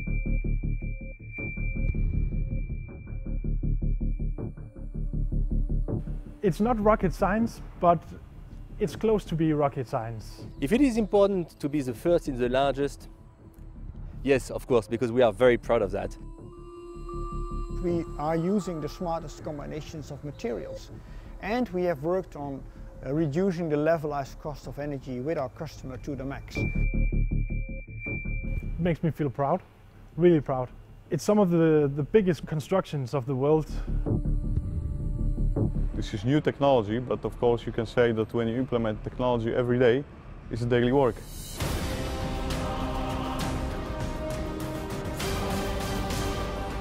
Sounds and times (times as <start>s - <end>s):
Music: 0.0s - 31.0s, 33.4s - 46.8s
Speech: 6.4s - 8.2s, 8.8s - 13.1s, 14.2s - 16.2s, 17.8s - 26.6s, 28.8s - 33.8s, 36.0s - 41.2s.